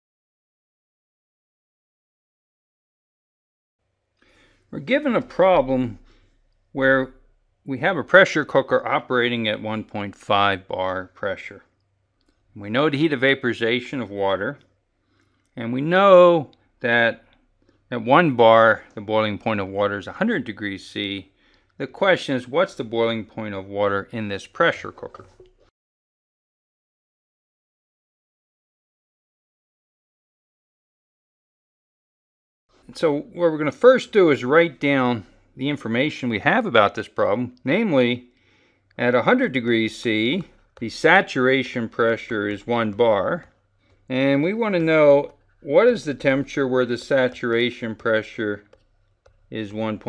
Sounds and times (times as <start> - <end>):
Speech: 4.7 - 6.1, 6.8 - 11.7, 12.6 - 14.6, 15.6 - 17.3, 17.9 - 25.4, 32.9 - 38.3, 39.0 - 43.5, 44.1 - 48.7, 49.5 - 50.0.